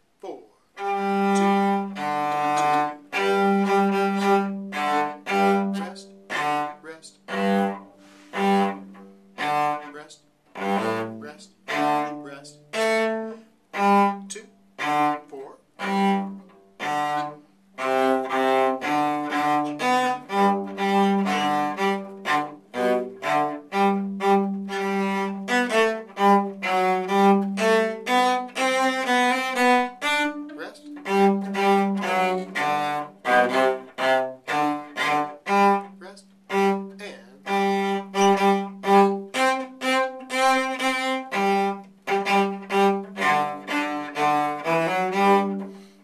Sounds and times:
Cello: 0.0 - 46.0
Speech: 0.2 - 0.6, 6.8 - 7.2, 12.2 - 12.6, 15.3 - 15.6, 30.6 - 30.9, 36.0 - 36.2, 37.0 - 37.4.

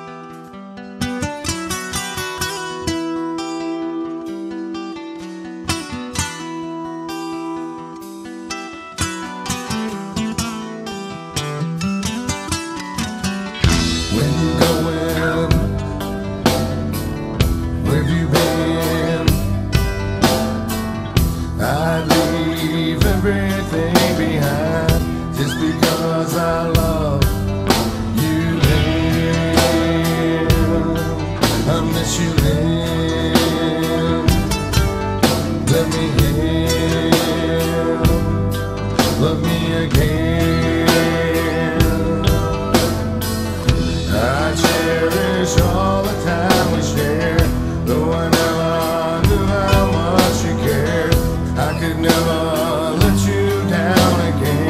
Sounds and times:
Music: 0.0 - 54.7.

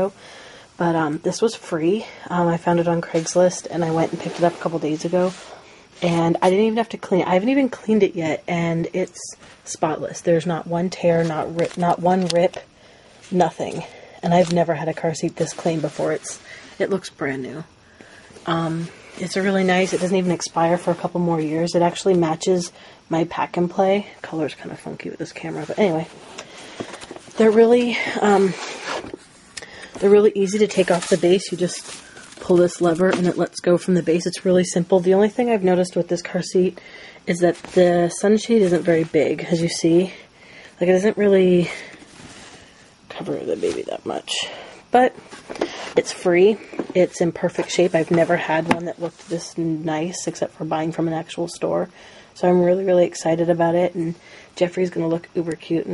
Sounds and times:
Speech: 0.8 - 12.7, 13.3 - 17.7, 18.4 - 26.1, 27.4 - 28.6, 30.0 - 40.2, 40.8 - 41.9, 43.1 - 45.2, 46.0 - 55.9.

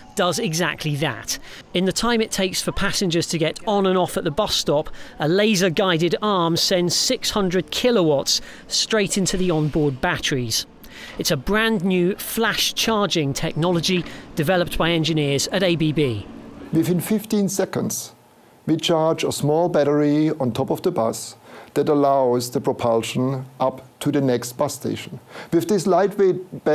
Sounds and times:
Speech: 0.0 - 26.7.

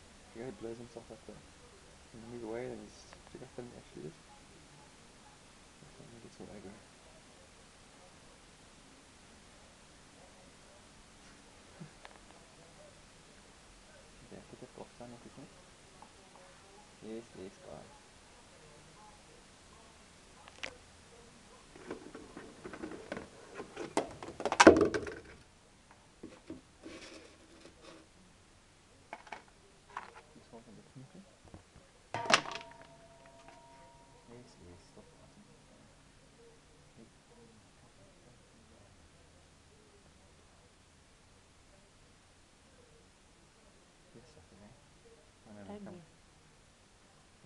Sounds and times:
Speech: 0.0 - 22.0, 33.8 - 47.4
Inside, small room: 0.0 - 47.4.

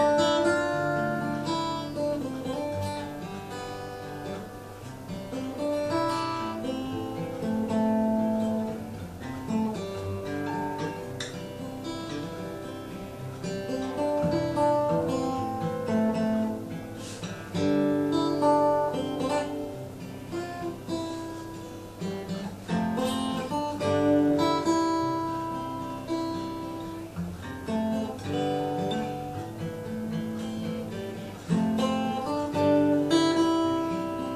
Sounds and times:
Acoustic guitar: 0.0 - 34.3.

